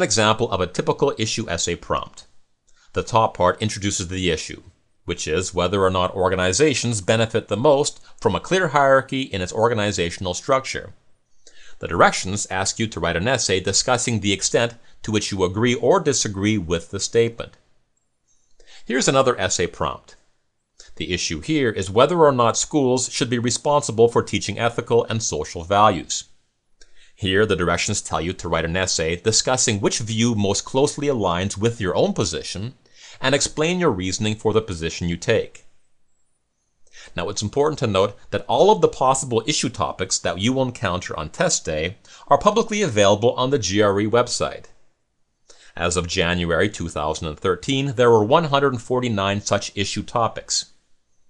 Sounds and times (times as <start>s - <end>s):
Speech: 0.0s - 11.0s, 11.7s - 17.6s, 18.8s - 20.2s, 20.8s - 26.3s, 27.2s - 35.7s, 37.0s - 44.8s, 45.7s - 50.8s.